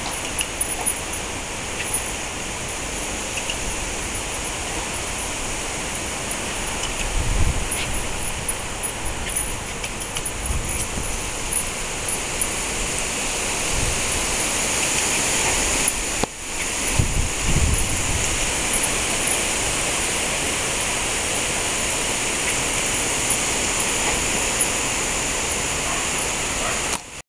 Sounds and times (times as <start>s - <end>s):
Bow-wow: 25.8s - 27.0s.